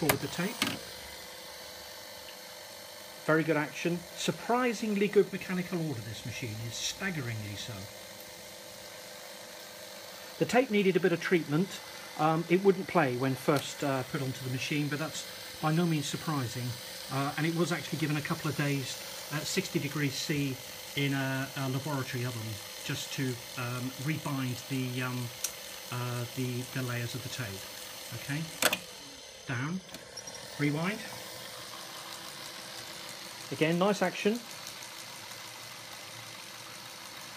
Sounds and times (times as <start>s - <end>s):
Speech: 0.0s - 0.8s, 3.2s - 7.9s, 10.4s - 28.6s, 29.5s - 29.9s, 30.6s - 31.2s, 33.5s - 34.5s.